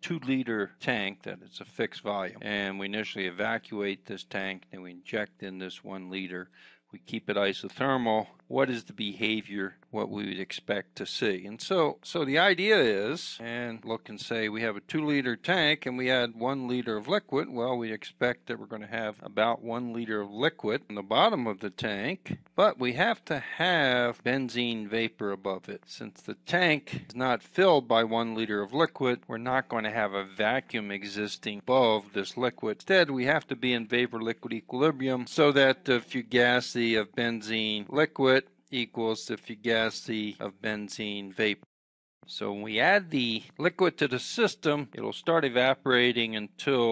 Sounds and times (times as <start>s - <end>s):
Speech: 0.0s - 41.7s, 42.3s - 46.9s.